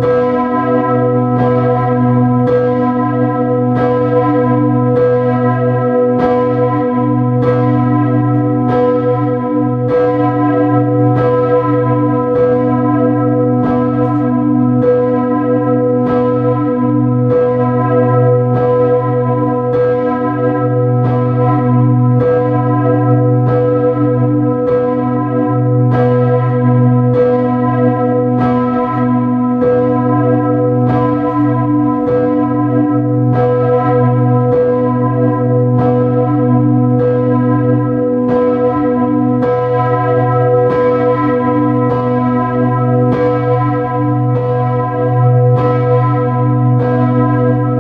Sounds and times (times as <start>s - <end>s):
Church bell: 0.0s - 47.8s.